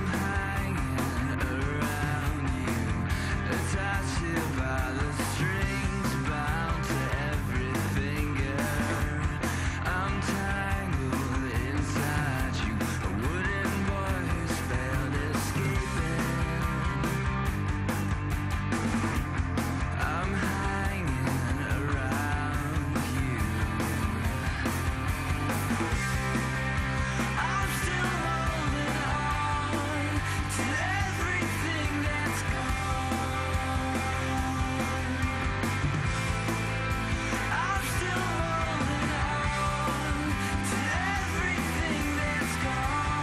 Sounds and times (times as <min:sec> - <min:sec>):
Music: 0:00.0 - 0:43.2.